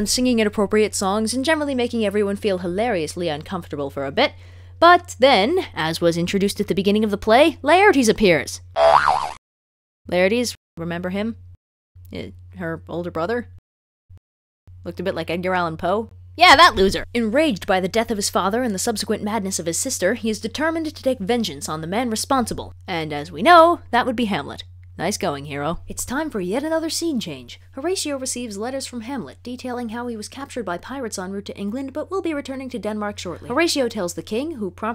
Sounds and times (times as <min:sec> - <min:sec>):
Speech: 0:00.0 - 0:08.7, 0:10.1 - 0:11.4, 0:12.1 - 0:13.5, 0:14.8 - 0:34.9.